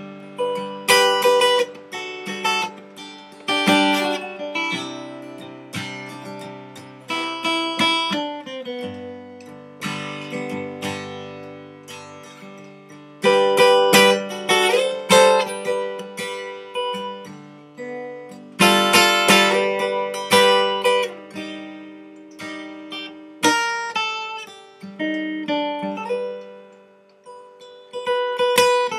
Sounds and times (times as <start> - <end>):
Acoustic guitar: 0.0 - 28.9
Strum: 0.0 - 28.9.